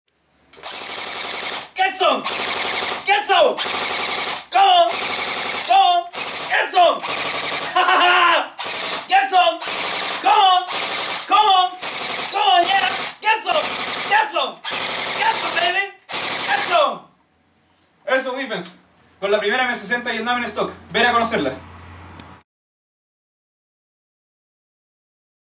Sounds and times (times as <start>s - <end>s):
Machine gun: 0.6s - 8.0s, 8.6s - 16.8s
Speech: 1.8s - 2.3s, 3.0s - 3.6s, 4.5s - 5.0s, 5.7s - 7.0s, 9.1s - 9.6s, 10.2s - 10.7s, 11.3s - 14.6s, 15.2s - 17.1s, 18.0s - 21.6s.